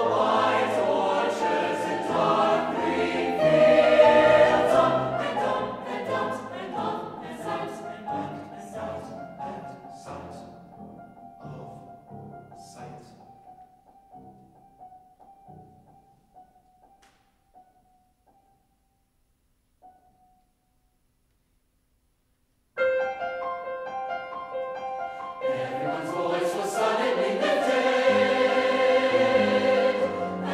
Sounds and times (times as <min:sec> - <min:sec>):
Choir: 0:00.0 - 0:10.7, 0:25.1 - 0:30.5.